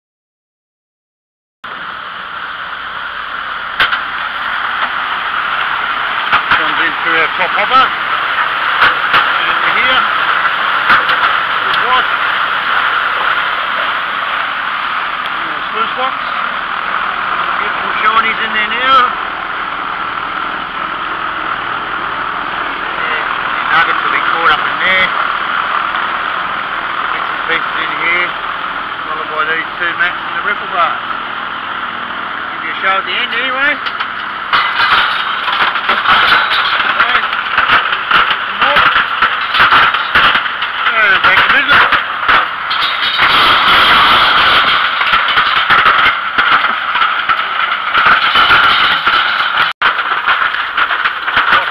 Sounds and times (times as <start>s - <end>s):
Speech: 6.6s - 7.9s, 9.3s - 10.1s, 11.6s - 12.1s, 15.3s - 16.2s, 17.4s - 19.2s, 22.9s - 25.2s, 27.1s - 28.4s, 29.0s - 31.0s, 32.5s - 33.8s, 36.8s - 37.3s, 38.4s - 38.9s, 40.8s - 41.9s.